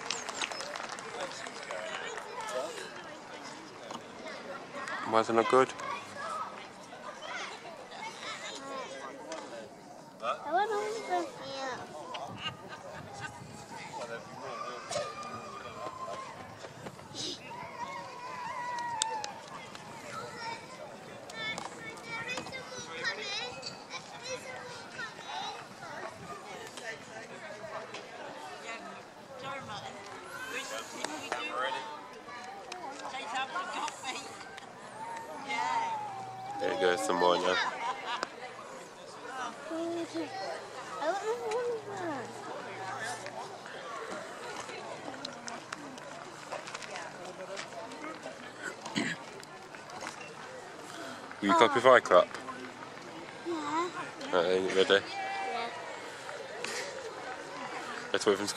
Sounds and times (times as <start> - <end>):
Outside, urban or manmade: 0.0 - 58.5.